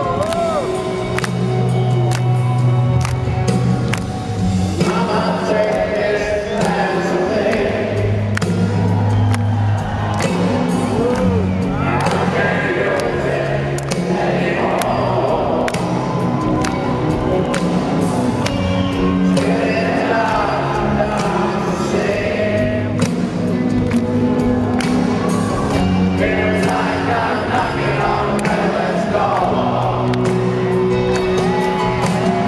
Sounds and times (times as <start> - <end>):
Music: 0.0 - 32.4.